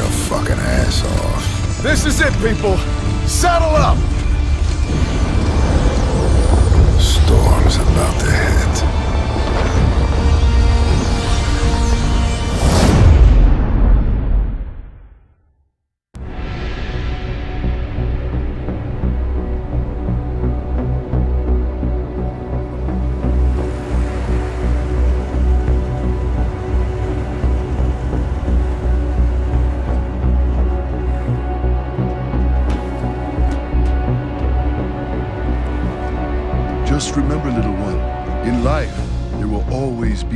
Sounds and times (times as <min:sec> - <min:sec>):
Music: 0:00.0 - 0:40.3.